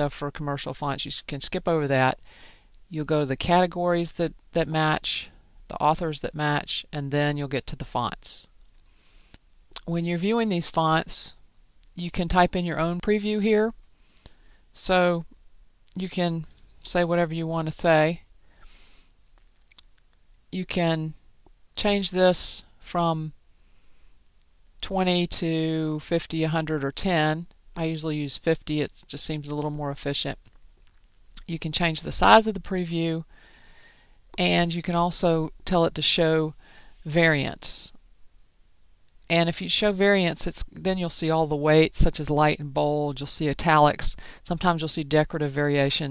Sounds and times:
Speech: 0:00.0 - 0:02.2, 0:02.9 - 0:08.6, 0:09.8 - 0:13.8, 0:14.8 - 0:18.3, 0:20.5 - 0:21.2, 0:21.8 - 0:23.4, 0:24.8 - 0:30.5, 0:31.4 - 0:33.3, 0:34.4 - 0:38.0, 0:39.3 - 0:46.1
Inside, small room: 0:00.0 - 0:46.1.

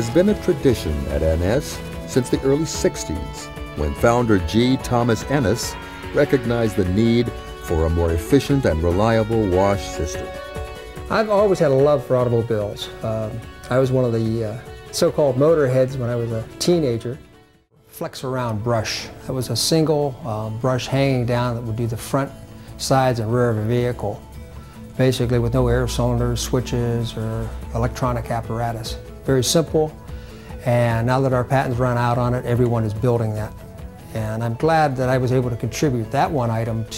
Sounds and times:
Speech: 0:00.0 - 0:10.4, 0:11.1 - 0:17.2, 0:17.9 - 0:24.2, 0:25.0 - 0:30.0, 0:30.6 - 0:36.9
Music: 0:00.0 - 0:36.9.

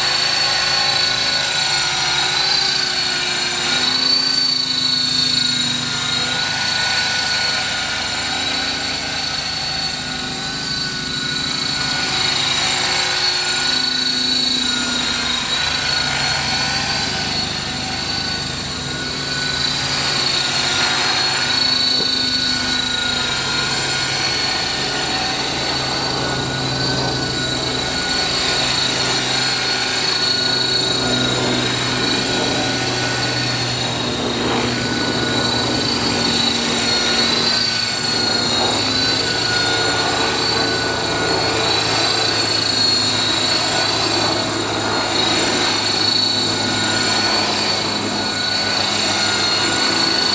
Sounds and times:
Helicopter: 0:00.0 - 0:50.3
Outside, urban or manmade: 0:00.0 - 0:50.3.

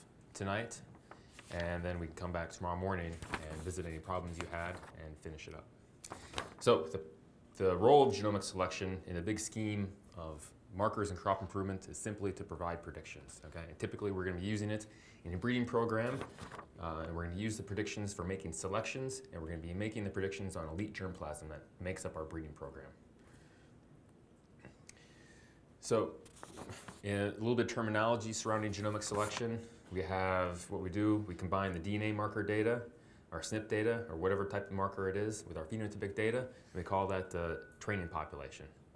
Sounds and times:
Speech: 0:00.0 - 0:00.9, 0:01.5 - 0:05.7, 0:06.6 - 0:23.0, 0:25.8 - 0:26.2, 0:27.0 - 0:38.8.

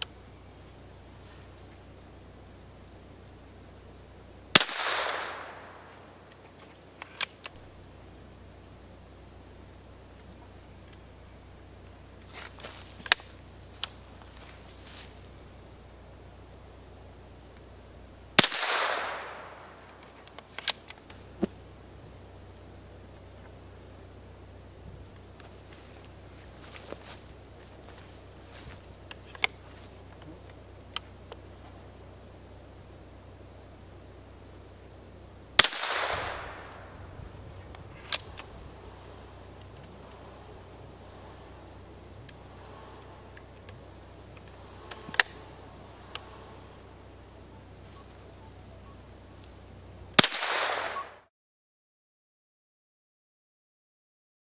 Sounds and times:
Outside, rural or natural: 0:00.0 - 0:51.3.

